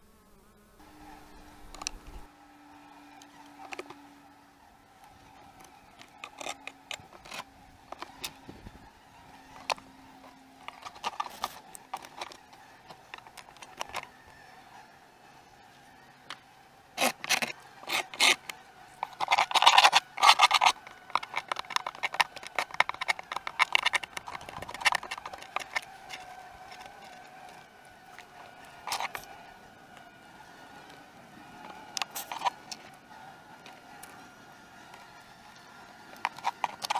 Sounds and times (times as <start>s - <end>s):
Bee, wasp, etc.: 0.0s - 36.9s.